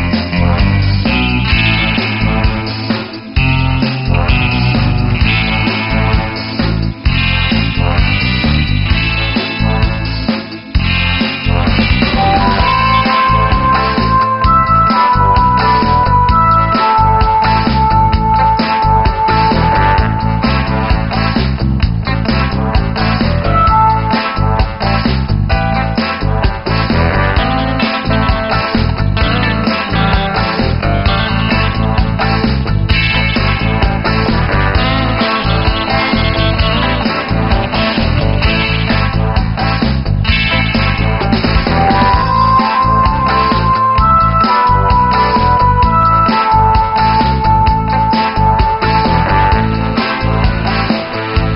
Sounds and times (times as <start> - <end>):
Music: 0.0 - 51.5.